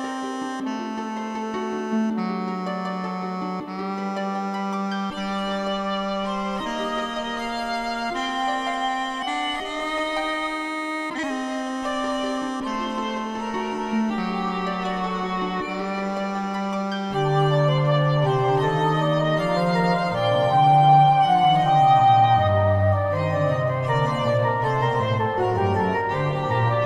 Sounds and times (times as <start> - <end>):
Bowed string instrument: 0.0 - 26.8.